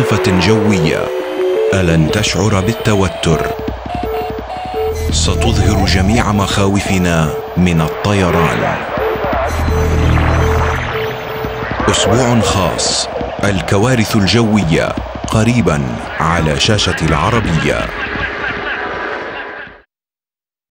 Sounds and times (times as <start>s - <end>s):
Speech: 0.0s - 1.1s, 1.7s - 3.6s, 5.1s - 8.9s, 11.8s - 18.0s.